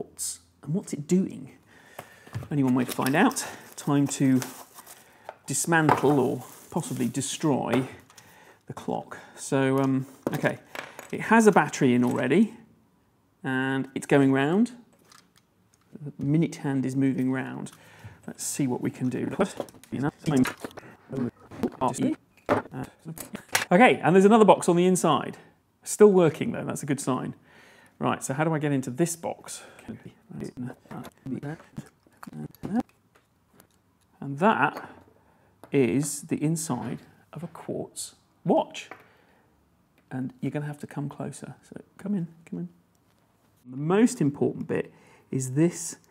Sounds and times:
Speech: 0:00.0 - 0:01.6, 0:02.5 - 0:04.5, 0:05.5 - 0:08.0, 0:08.7 - 0:12.7, 0:13.4 - 0:14.8, 0:15.9 - 0:27.4, 0:28.0 - 0:32.9, 0:34.2 - 0:35.0, 0:35.7 - 0:38.9, 0:40.1 - 0:42.8, 0:43.7 - 0:46.1.

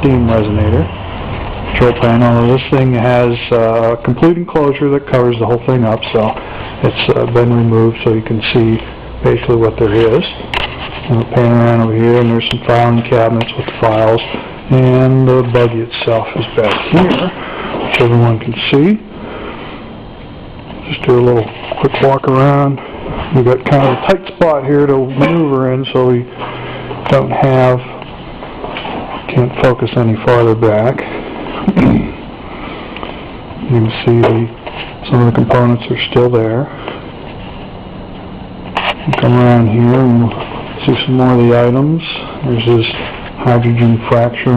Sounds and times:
Speech: 0:00.0 - 0:01.0, 0:01.7 - 0:10.5, 0:11.1 - 0:19.1, 0:20.8 - 0:26.3, 0:27.1 - 0:28.0, 0:29.3 - 0:31.1, 0:31.7 - 0:32.2, 0:33.6 - 0:36.7, 0:39.1 - 0:44.5.

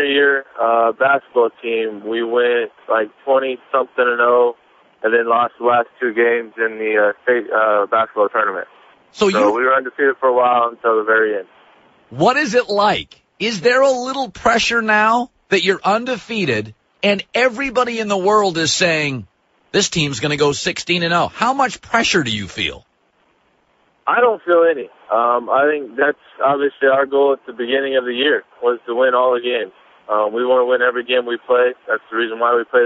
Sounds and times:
Speech: 0:00.0 - 0:11.5, 0:12.2 - 0:22.8, 0:24.1 - 0:32.8
Radio: 0:07.1 - 0:10.0, 0:12.2 - 0:19.2, 0:19.8 - 0:22.8.

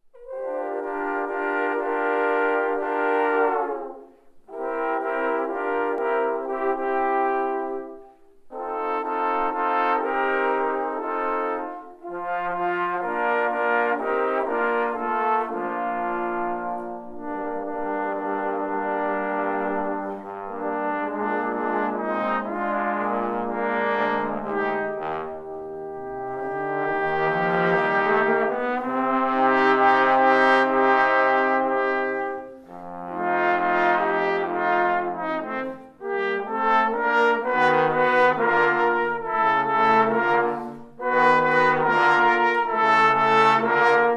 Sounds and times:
French horn: 0:00.0 - 0:44.1
Trumpet: 0:00.0 - 0:44.1
Trombone: 0:00.1 - 0:44.1.

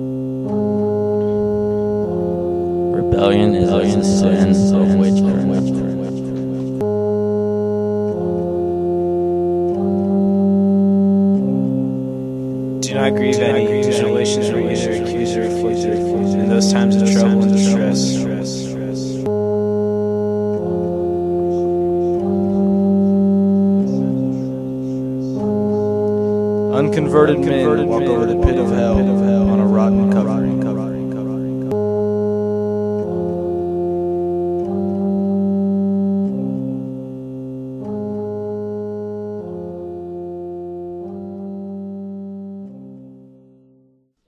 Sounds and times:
Music: 0:00.0 - 0:44.2
Speech: 0:03.0 - 0:06.6, 0:12.8 - 0:19.3, 0:23.8 - 0:25.6, 0:26.7 - 0:31.7.

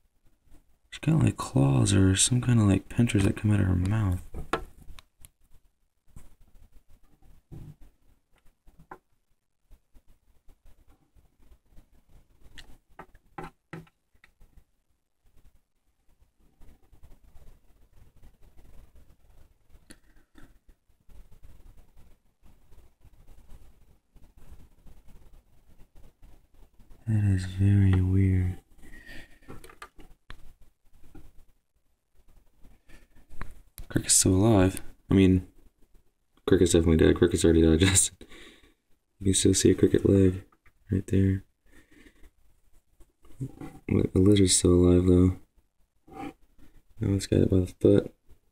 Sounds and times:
Silence: 0:00.0 - 0:48.5.

